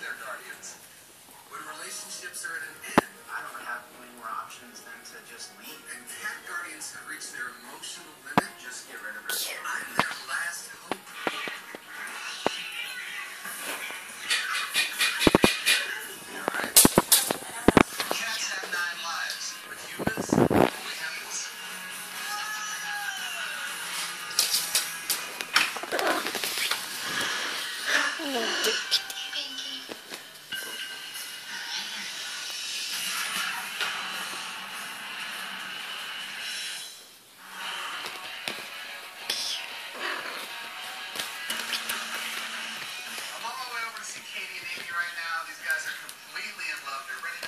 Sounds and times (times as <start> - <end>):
Music: 0.0 - 47.4
Cat: 25.8 - 26.8, 27.4 - 29.4, 39.2 - 40.8.